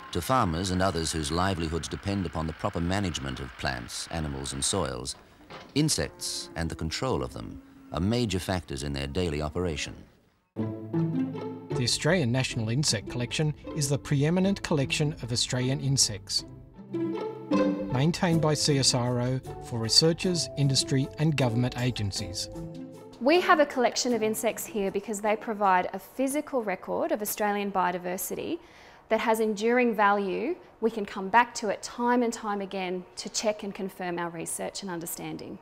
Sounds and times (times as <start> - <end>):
Speech: 0.1 - 5.2, 5.8 - 10.1, 11.8 - 16.4, 17.9 - 22.6, 23.2 - 35.6
Music: 10.6 - 25.1.